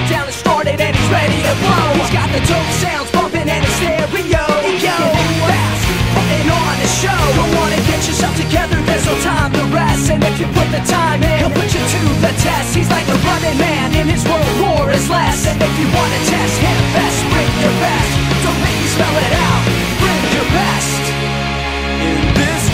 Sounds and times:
Ska: 0:00.0 - 0:22.7.

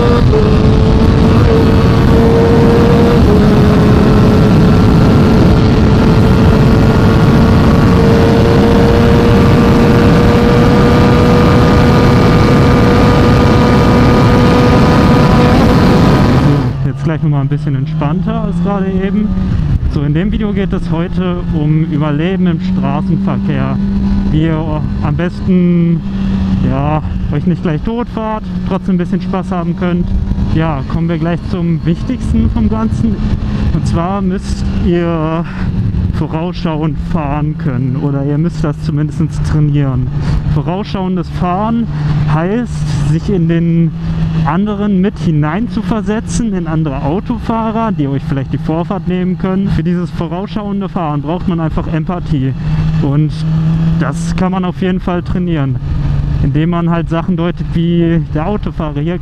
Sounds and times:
Motorcycle: 0:00.0 - 0:59.2
Speech: 0:16.8 - 0:19.3, 0:19.9 - 0:26.0, 0:26.6 - 0:33.2, 0:33.8 - 0:35.5, 0:36.2 - 0:55.8, 0:56.4 - 0:59.2.

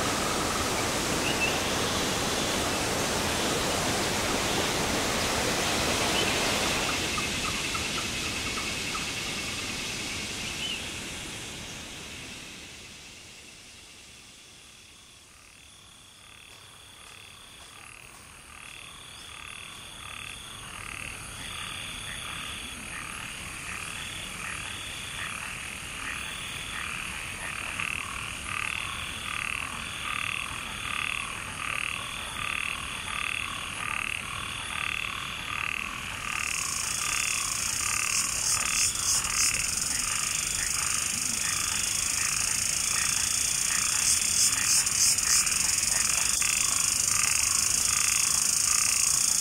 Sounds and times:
Insect: 0:00.0 - 0:49.4.

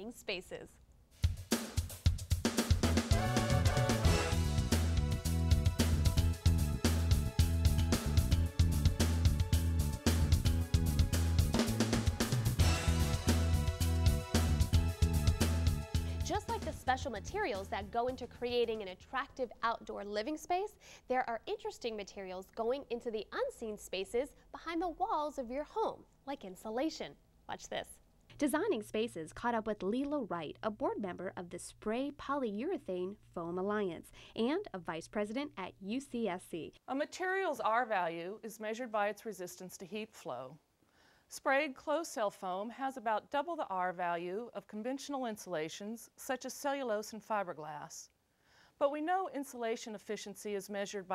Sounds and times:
Music: 0:01.2 - 0:18.5.

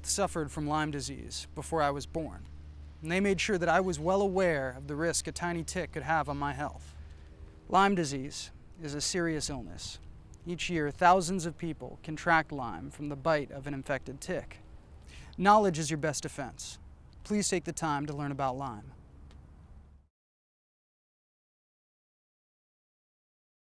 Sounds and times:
Speech: 0:00.0 - 0:06.9, 0:07.7 - 0:14.6, 0:15.4 - 0:19.0.

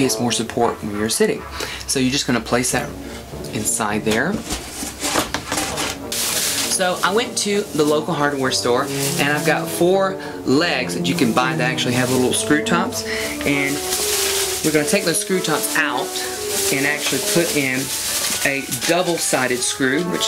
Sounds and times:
Speech: 0:00.0 - 0:04.4, 0:06.7 - 0:13.9, 0:14.6 - 0:20.2
Music: 0:00.0 - 0:20.2.

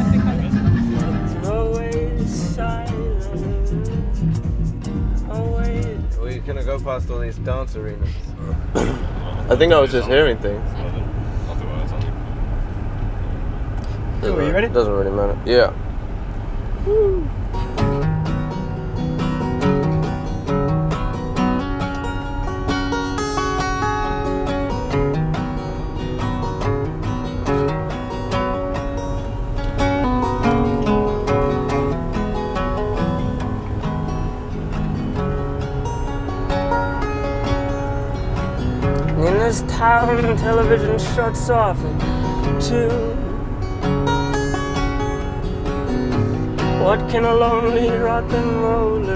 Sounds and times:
Music: 0:00.0 - 0:10.0, 0:17.6 - 0:49.1
Vehicle: 0:00.0 - 0:49.1.

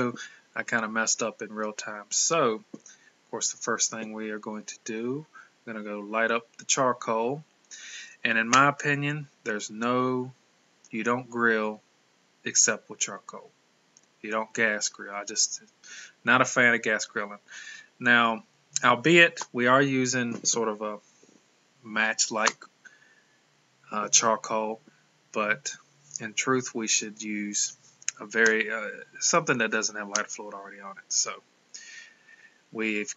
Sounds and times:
Speech: 0:00.0 - 0:11.8, 0:12.5 - 0:13.5, 0:14.2 - 0:21.0, 0:21.9 - 0:22.7, 0:23.9 - 0:32.0, 0:32.8 - 0:33.1.

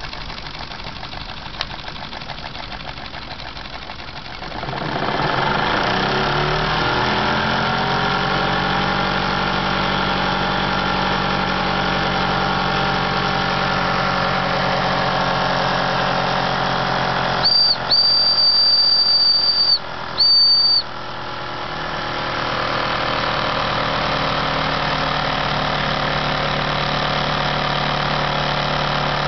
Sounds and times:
Heavy engine (low frequency): 0:00.0 - 0:29.2.

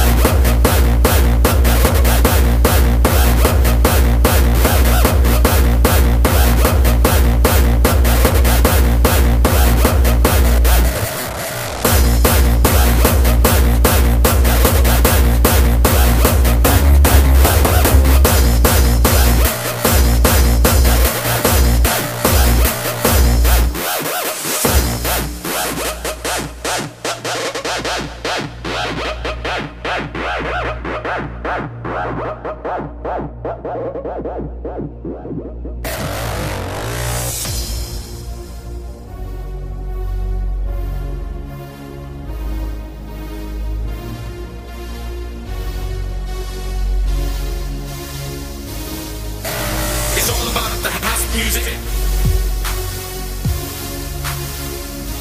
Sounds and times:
Music: 0:00.0 - 0:55.2.

